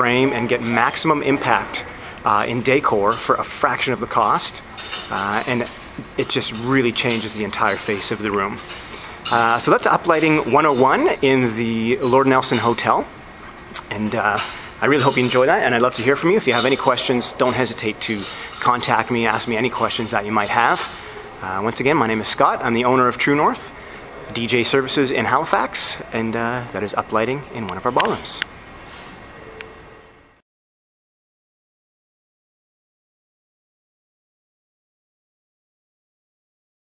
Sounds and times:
Speech: 0.0 - 8.6, 9.3 - 13.1, 13.8 - 23.7, 24.3 - 28.5.

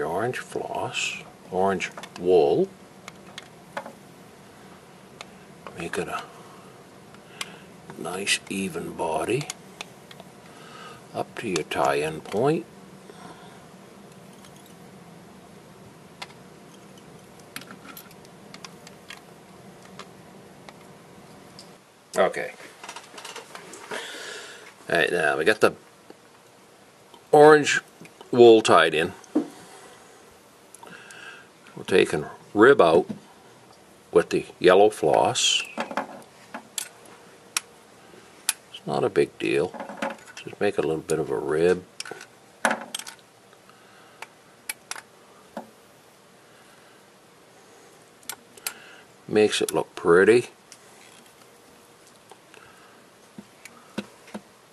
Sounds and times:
Speech: 0.0 - 2.7, 5.7 - 6.3, 7.9 - 9.5, 11.1 - 12.7, 22.2 - 22.6, 24.9 - 25.8, 27.3 - 29.2, 31.8 - 33.2, 34.1 - 35.8, 38.7 - 39.8, 40.4 - 41.9, 49.3 - 50.6.

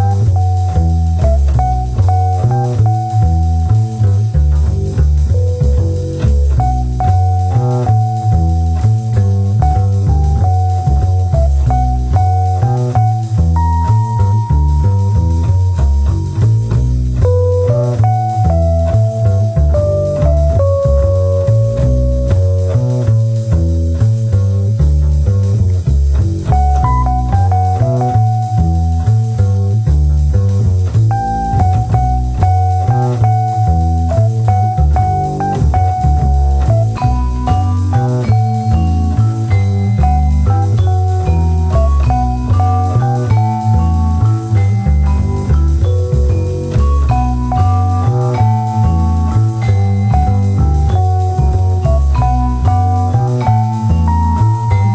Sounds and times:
Music: 0.0 - 54.9.

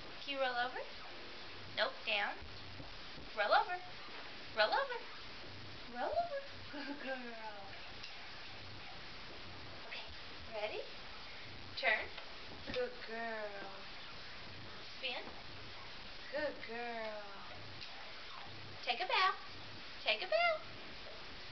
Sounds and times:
Speech: 0.2 - 0.9, 1.8 - 2.4, 3.4 - 3.9, 4.6 - 5.1, 5.9 - 7.8, 9.9 - 11.0, 12.7 - 13.9, 15.0 - 15.3, 16.3 - 17.6, 18.8 - 19.4, 20.0 - 20.7.

